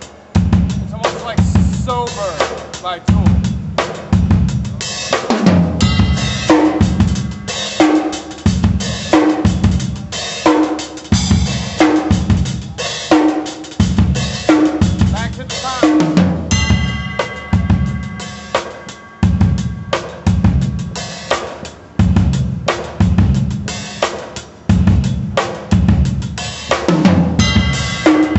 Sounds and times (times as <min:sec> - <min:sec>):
Drum kit: 0:00.0 - 0:28.3
Bass drum: 0:00.4 - 0:04.8, 0:05.4 - 0:07.6, 0:08.4 - 0:10.1, 0:11.2 - 0:12.8, 0:13.8 - 0:18.4, 0:19.2 - 0:21.0, 0:22.0 - 0:23.7, 0:24.7 - 0:28.3.